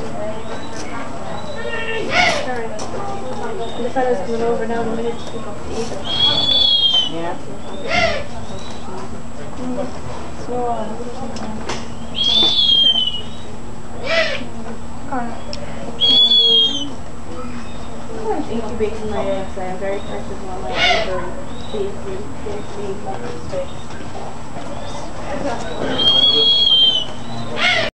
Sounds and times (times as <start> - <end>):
Owl: 0.4 - 2.5, 6.0 - 8.8, 11.9 - 14.5, 15.4 - 18.0, 20.0 - 21.8, 25.7 - 27.9.